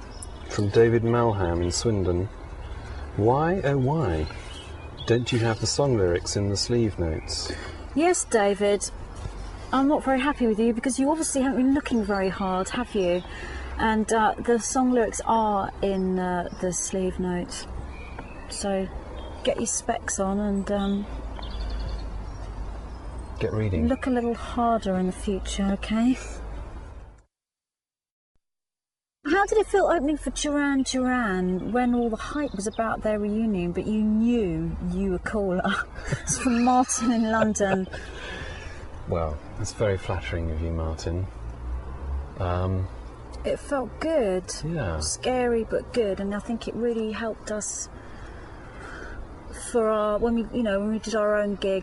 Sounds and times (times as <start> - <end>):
Female speech, woman speaking: 8.0 - 8.9, 9.8 - 17.7, 18.5 - 21.1, 23.8 - 26.3, 29.3 - 38.0, 43.4 - 47.9, 49.5 - 51.8.